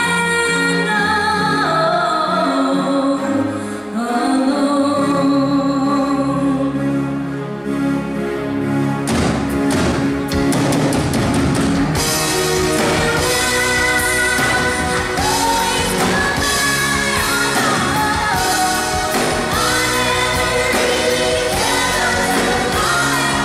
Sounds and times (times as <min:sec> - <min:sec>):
Music: 0:00.0 - 0:23.4
Female singing: 0:12.7 - 0:23.4.